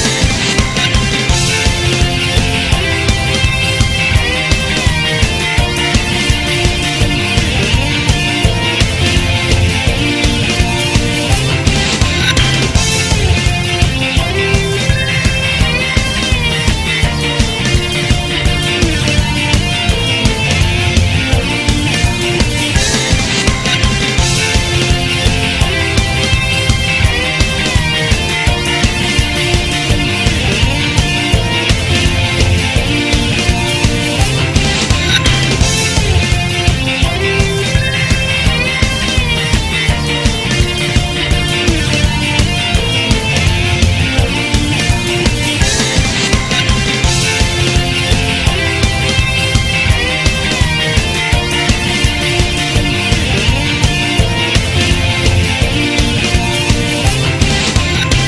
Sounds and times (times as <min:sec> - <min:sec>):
Music: 0:00.0 - 0:58.2.